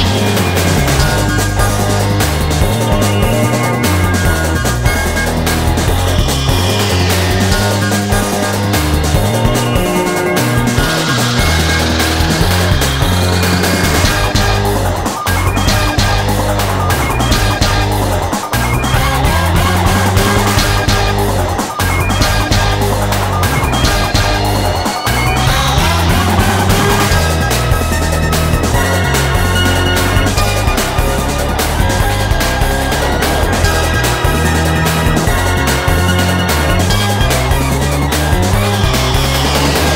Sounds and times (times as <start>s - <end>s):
Music: 0.0s - 39.9s.